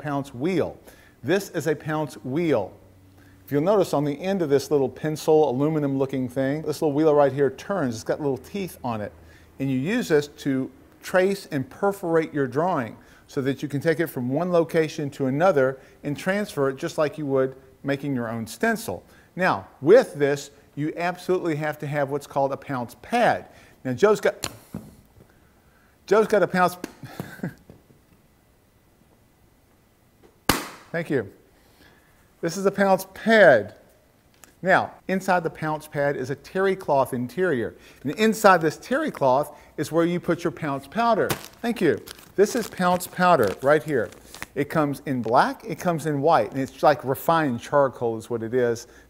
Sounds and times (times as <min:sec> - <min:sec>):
Speech: 0:00.0 - 0:02.8, 0:03.5 - 0:24.4, 0:26.1 - 0:26.8, 0:30.9 - 0:31.4, 0:32.4 - 0:33.8, 0:34.6 - 0:48.9.